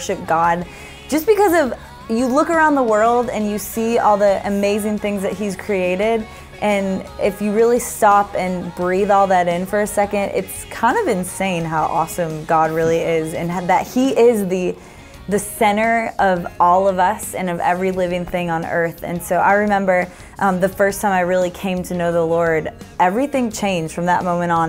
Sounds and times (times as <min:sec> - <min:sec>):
Music: 0:00.0 - 0:24.6
Speech: 0:00.0 - 0:24.6.